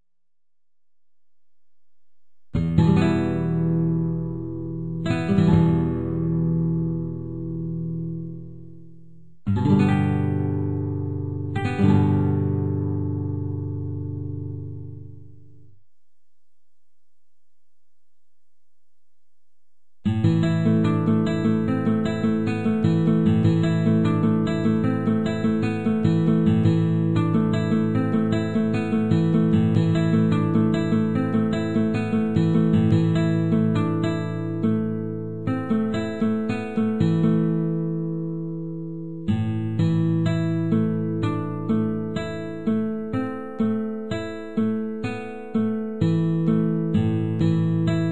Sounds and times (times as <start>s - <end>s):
Acoustic guitar: 2.5s - 15.9s, 20.0s - 48.1s.